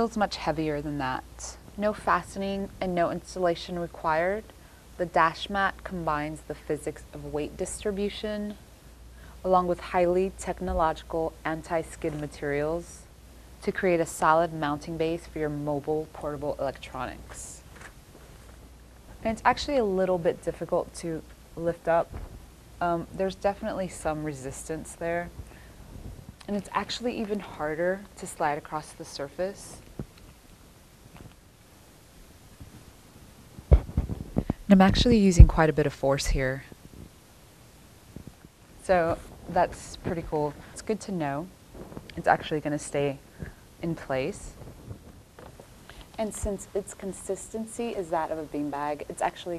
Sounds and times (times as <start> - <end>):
Speech: 0.0 - 8.6, 9.4 - 17.6, 19.2 - 22.1, 22.8 - 25.4, 26.4 - 29.9, 34.7 - 36.8, 38.8 - 41.5, 42.1 - 43.2, 43.8 - 44.6, 46.2 - 49.5.